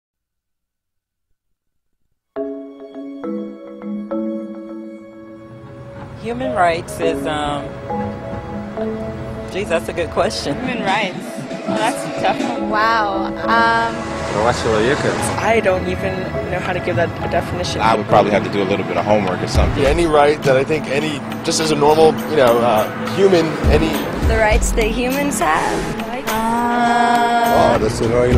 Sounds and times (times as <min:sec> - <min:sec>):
Music: 0:02.4 - 0:28.3
Outside, urban or manmade: 0:03.2 - 0:28.3.